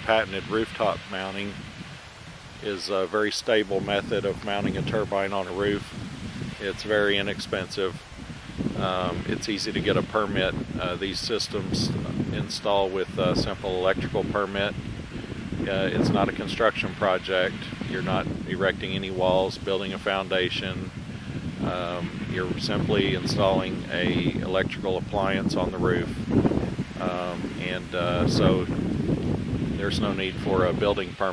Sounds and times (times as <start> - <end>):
Wind noise (microphone): 0.0 - 31.3.